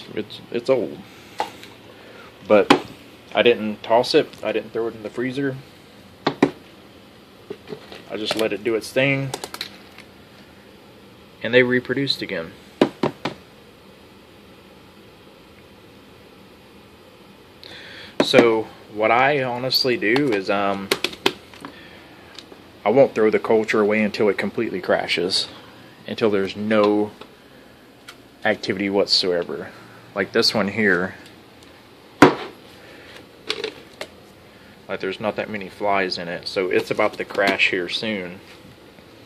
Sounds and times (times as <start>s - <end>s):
Speech: 0.0s - 1.1s, 2.4s - 5.7s, 8.1s - 9.4s, 11.4s - 12.6s, 18.2s - 20.9s, 22.8s - 27.2s, 28.4s - 31.3s, 34.9s - 38.5s.